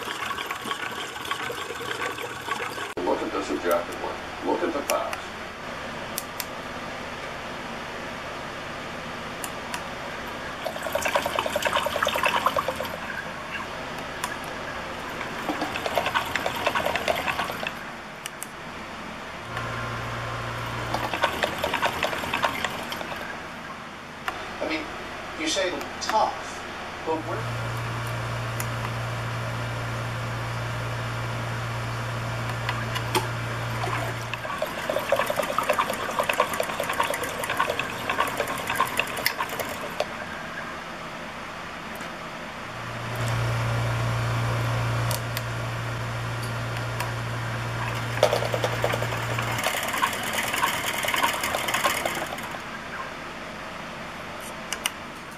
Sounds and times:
Trickle, dribble: 0.0s - 3.0s, 10.6s - 13.7s, 15.2s - 17.8s, 20.9s - 23.3s, 33.8s - 40.2s.

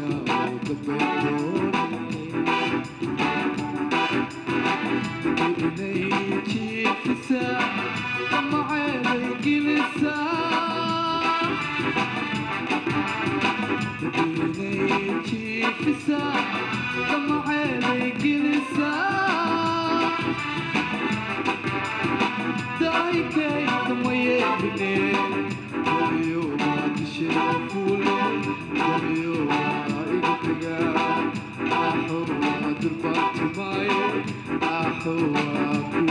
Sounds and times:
Singing: 0.0s - 2.7s, 5.4s - 11.6s, 14.1s - 20.6s, 22.8s - 36.1s
Music: 0.0s - 36.1s.

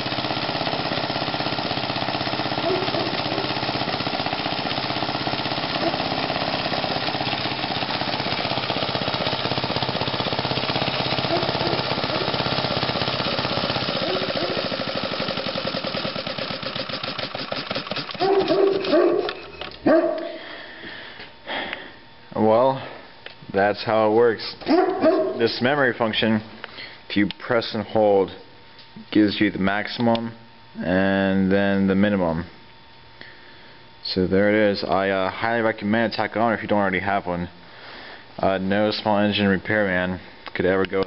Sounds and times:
Engine: 0.0s - 22.0s.

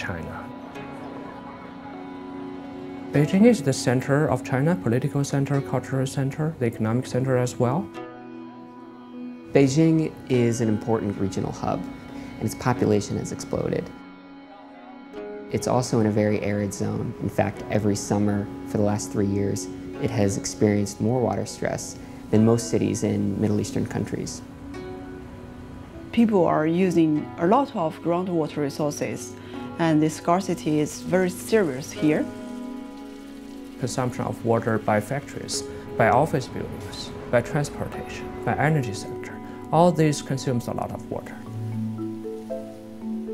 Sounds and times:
Music: 0.0s - 43.3s
Speech: 3.2s - 7.9s, 15.5s - 24.4s, 26.2s - 32.3s, 33.8s - 41.4s.

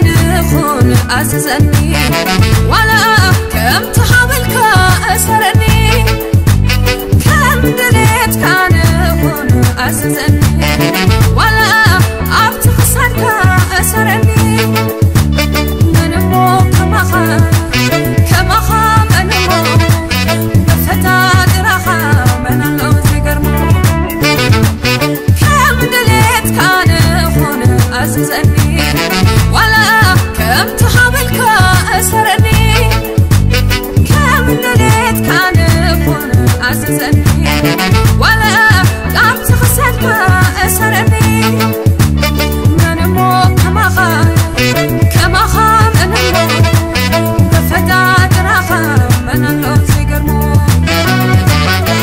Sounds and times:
Happy music: 0.0s - 52.0s
Jazz: 0.0s - 52.0s.

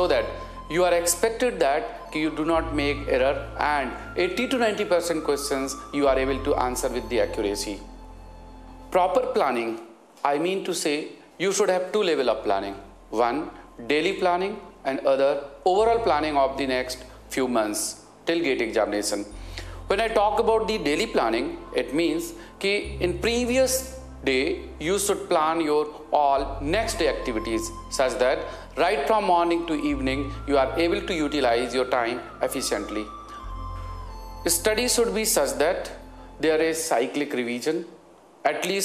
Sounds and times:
Speech: 0.0s - 7.9s, 8.9s - 19.3s, 19.9s - 33.1s, 34.5s - 37.9s, 38.5s - 38.8s
Music: 0.0s - 38.0s.

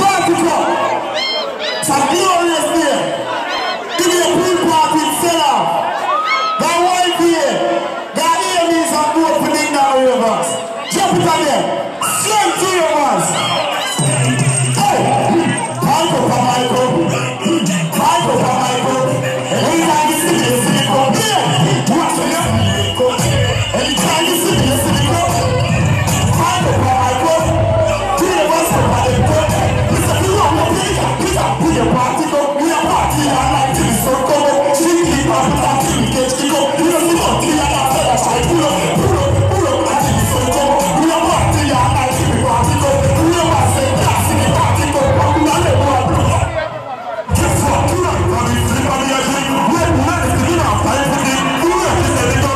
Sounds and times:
Music: 10.4s - 46.7s, 47.3s - 52.5s.

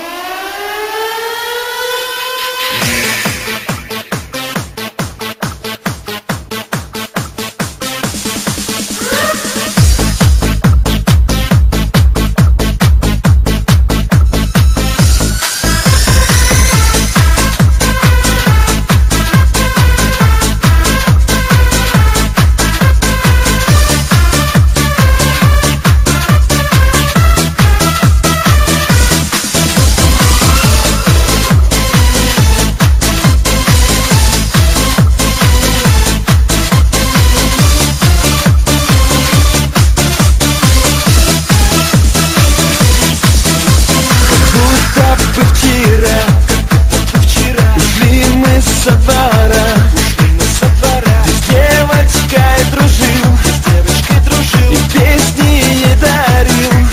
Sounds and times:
Techno: 0.0s - 56.9s.

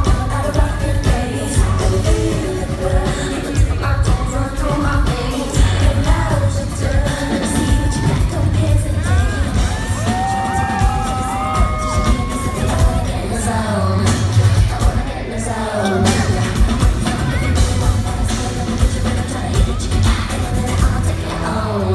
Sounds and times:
Music: 0.0s - 21.9s.

